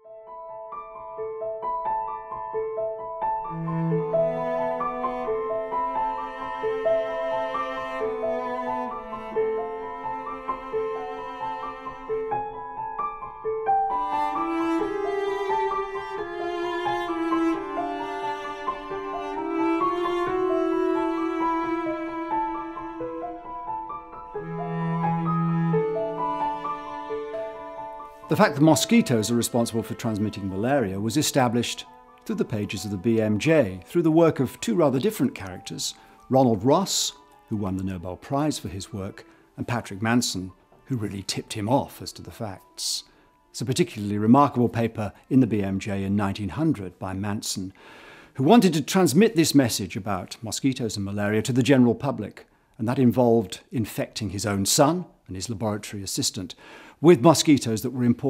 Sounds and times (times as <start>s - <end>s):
Music: 0.0s - 58.2s
Speech: 28.3s - 47.8s, 48.4s - 58.2s.